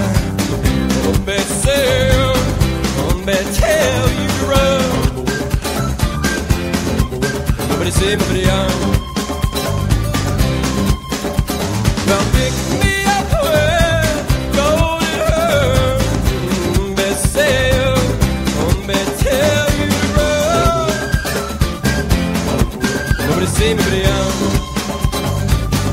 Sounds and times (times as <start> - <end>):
Disco: 0.0 - 25.9.